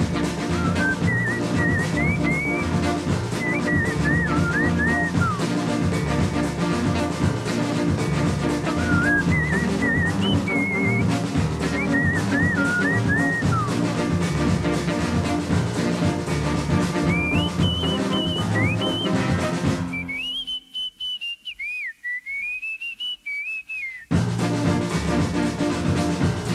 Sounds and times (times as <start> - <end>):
Whistling: 0.4 - 5.6, 8.6 - 13.8, 17.0 - 24.2.